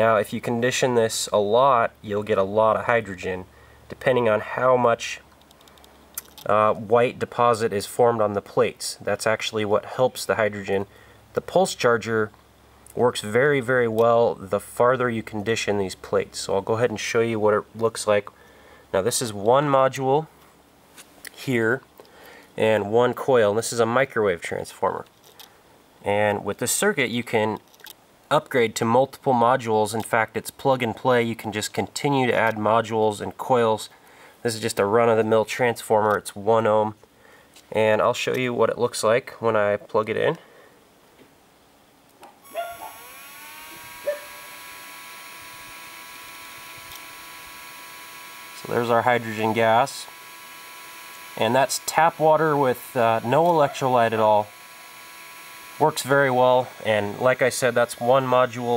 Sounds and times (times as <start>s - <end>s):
Speech: 0.0s - 5.3s, 6.4s - 12.4s, 13.0s - 18.3s, 19.0s - 20.3s, 21.3s - 21.8s, 22.6s - 25.1s, 26.0s - 27.6s, 28.3s - 37.0s, 37.7s - 40.4s, 48.6s - 50.1s, 51.4s - 54.5s, 55.8s - 58.7s.